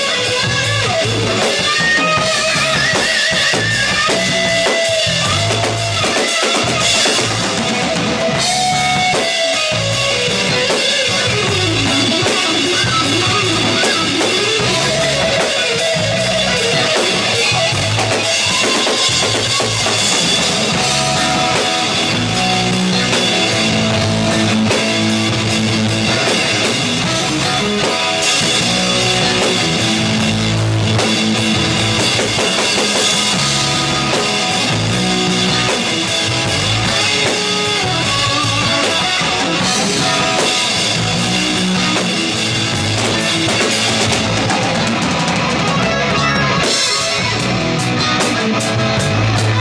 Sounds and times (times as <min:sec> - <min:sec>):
Drum kit: 0:00.0 - 0:49.6
Guitar: 0:00.0 - 0:49.6
Bass drum: 0:00.3 - 0:49.6.